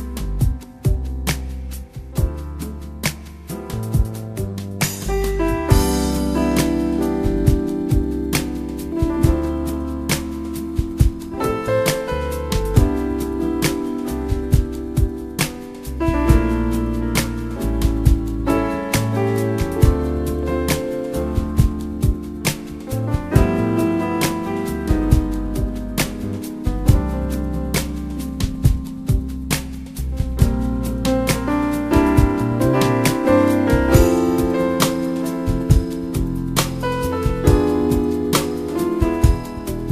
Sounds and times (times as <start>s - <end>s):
Music: 0.0s - 39.9s.